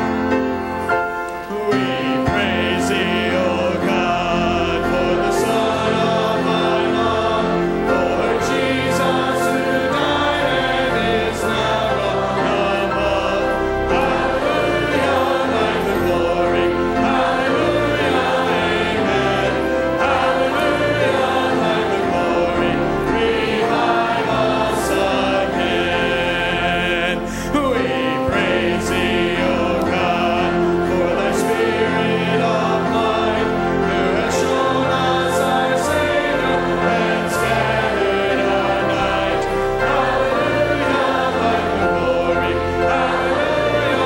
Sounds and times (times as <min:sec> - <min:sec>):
Choir: 0:00.0 - 0:44.0
Male singing: 0:01.5 - 0:07.0, 0:24.9 - 0:32.6.